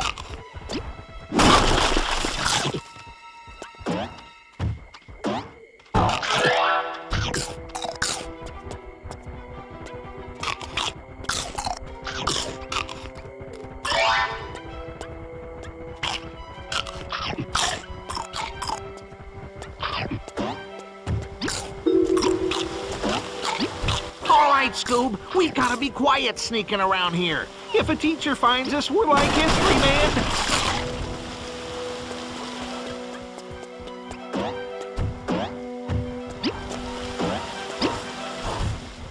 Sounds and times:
Outside, urban or manmade: 0:00.0 - 0:24.3, 0:30.2 - 0:39.1
Music: 0:00.0 - 0:39.1.

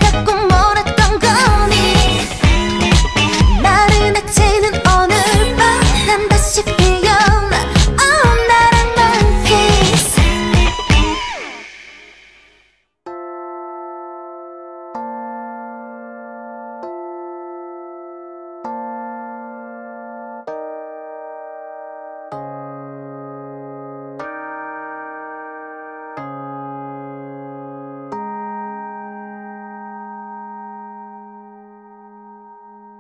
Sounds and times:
Music: 0:00.0 - 0:33.0.

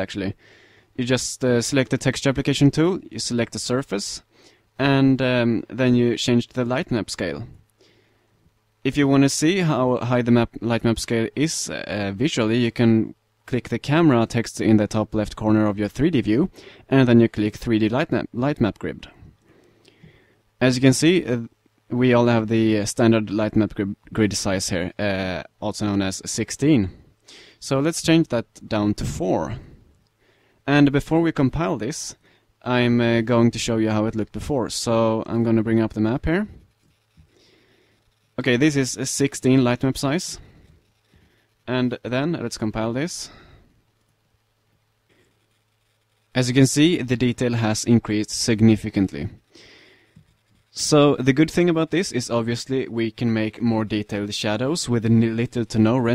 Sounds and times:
Speech: 0:00.0 - 0:00.4, 0:01.0 - 0:07.6, 0:08.8 - 0:19.3, 0:20.6 - 0:27.0, 0:27.6 - 0:29.8, 0:30.7 - 0:36.6, 0:38.4 - 0:40.6, 0:41.7 - 0:43.5, 0:46.3 - 0:49.4, 0:50.7 - 0:56.1.

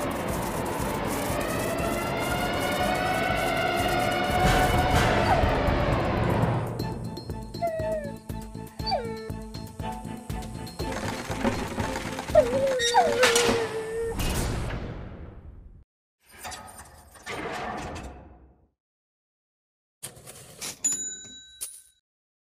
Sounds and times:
Music: 0:00.0 - 0:13.7.

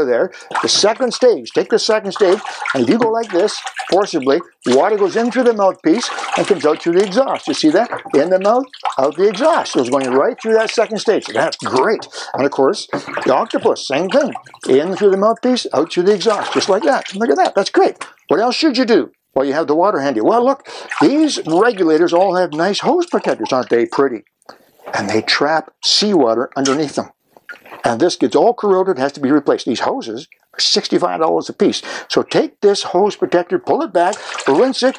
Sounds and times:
Speech: 0:00.0 - 0:24.2, 0:24.9 - 0:27.1, 0:27.8 - 0:34.9.

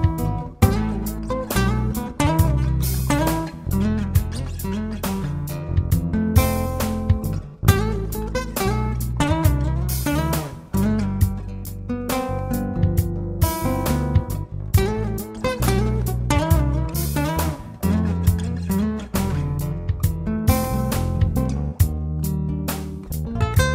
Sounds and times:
Acoustic guitar: 0:00.0 - 0:23.7
Jazz: 0:00.0 - 0:23.7
Rhythm and blues: 0:00.0 - 0:23.7
Soul music: 0:00.0 - 0:23.7.

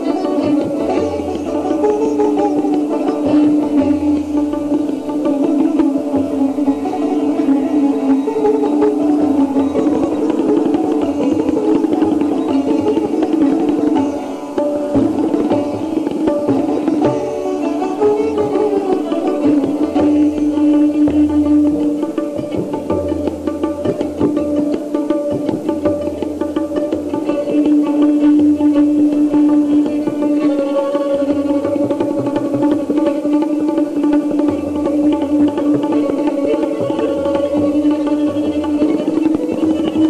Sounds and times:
Bowed string instrument: 0:00.0 - 0:40.0
Sitar: 0:00.0 - 0:40.0
Tabla: 0:00.0 - 0:40.0.

